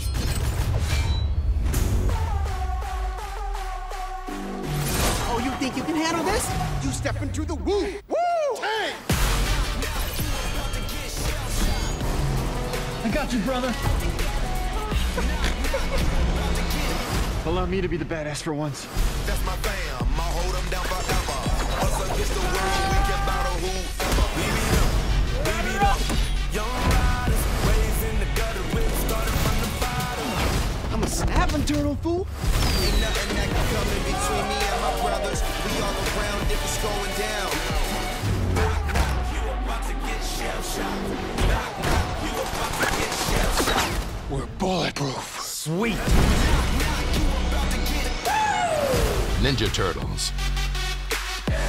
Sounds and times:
Soundtrack music: 0.0 - 8.1, 9.0 - 51.6
Background music: 0.0 - 51.6.

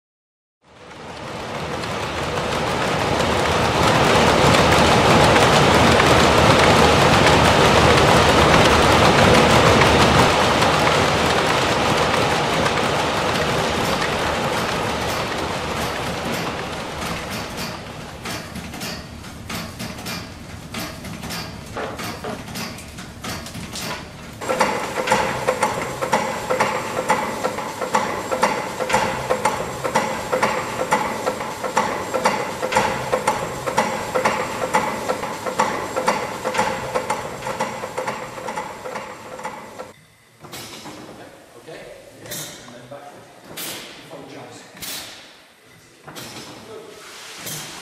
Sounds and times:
Engine: 0.6 - 41.1, 42.2 - 42.9, 44.8 - 45.3, 46.1 - 46.6, 47.4 - 47.8.

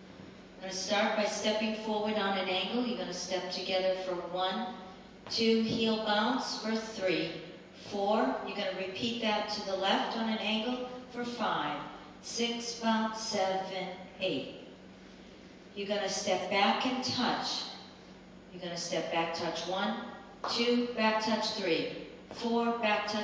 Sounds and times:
Speech: 0.6 - 14.6, 15.8 - 17.8, 18.5 - 23.2.

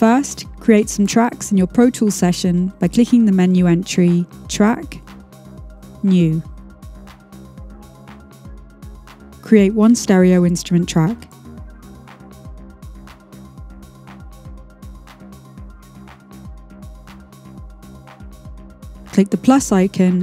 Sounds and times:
Speech: 0.0 - 5.0, 6.0 - 6.4, 9.4 - 11.3, 19.1 - 20.2
Music: 0.0 - 20.2.

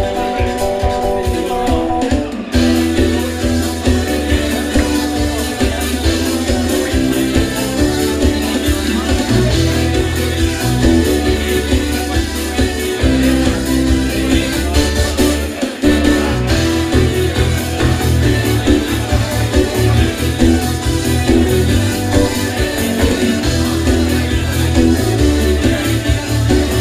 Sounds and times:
Pop music: 0.0 - 26.8.

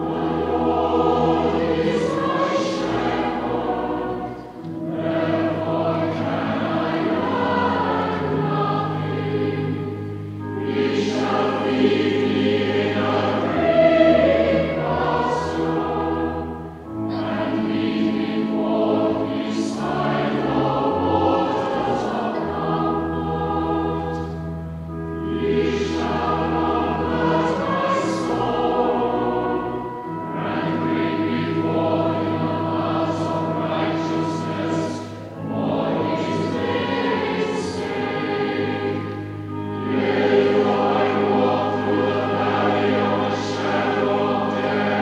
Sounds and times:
Mantra: 0.0 - 10.0, 10.6 - 24.3, 30.4 - 45.0.

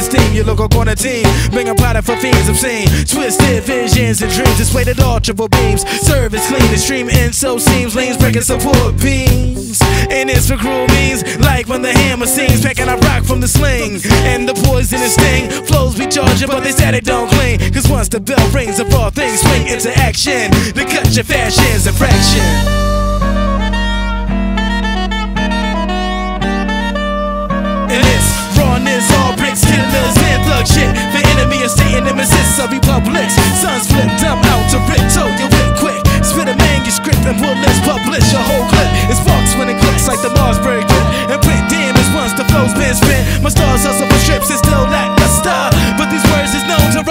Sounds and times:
Music: 0.0 - 47.1.

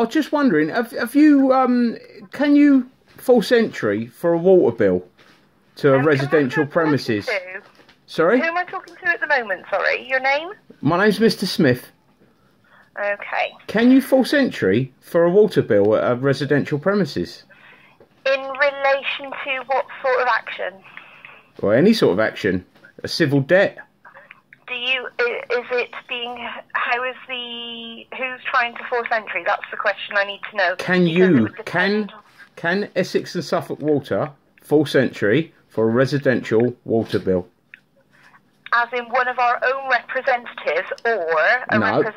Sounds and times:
Speech: 5.8 - 11.9, 13.0 - 17.4, 18.3 - 37.5, 38.7 - 42.1.

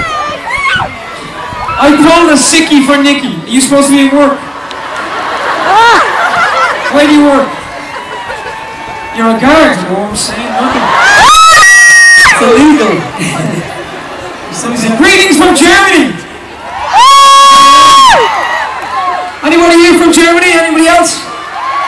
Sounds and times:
Male speech, man speaking: 1.8 - 4.4, 6.9 - 7.5, 9.2 - 10.9, 12.4 - 13.1, 14.5 - 16.2, 19.4 - 21.3.

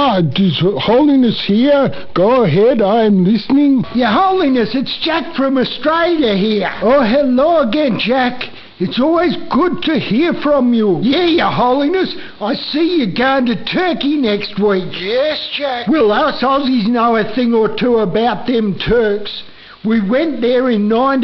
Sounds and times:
Speech: 0.0 - 21.2.

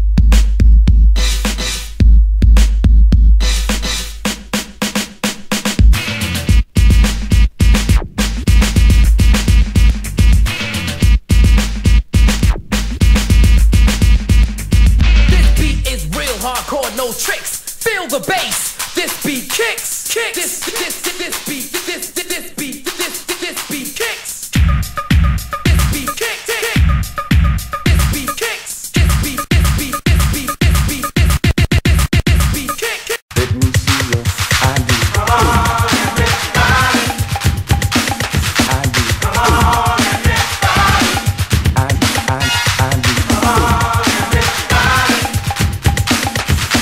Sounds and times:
Afrobeat: 0.0 - 46.8.

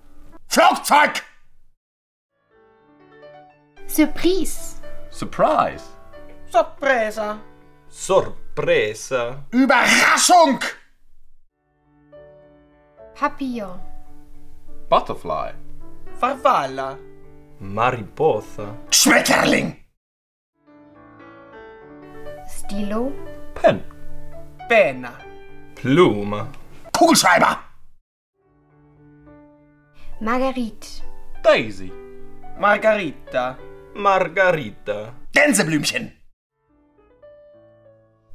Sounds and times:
Speech: 0.5 - 1.3, 8.0 - 10.8, 17.6 - 19.8, 25.8 - 27.7, 32.6 - 36.2
Music: 2.3 - 10.4, 11.5 - 19.8, 20.6 - 27.4, 28.4 - 38.3.

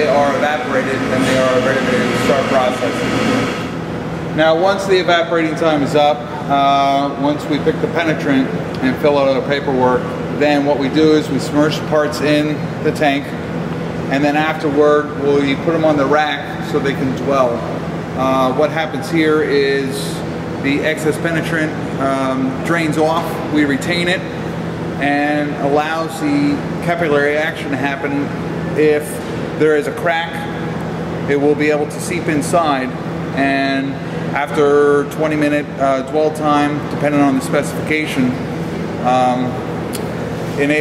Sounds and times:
Speech: 0.0 - 3.4, 4.3 - 13.4, 14.1 - 24.3, 25.0 - 30.6, 31.3 - 38.4, 39.0 - 39.6, 40.6 - 40.8.

